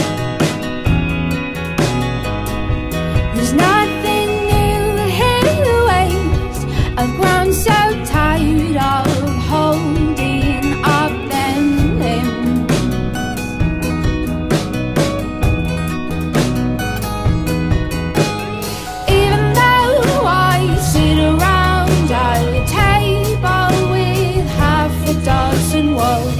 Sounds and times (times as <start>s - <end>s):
Music: 0.0s - 26.3s.